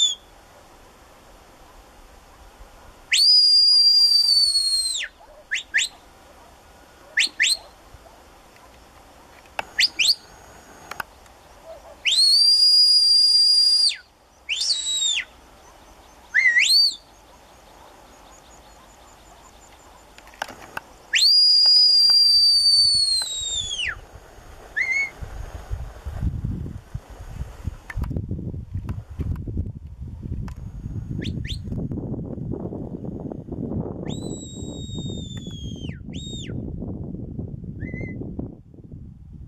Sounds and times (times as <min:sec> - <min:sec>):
Dog: 0:05.2 - 0:09.4, 0:11.6 - 0:12.1, 0:18.7 - 0:20.0.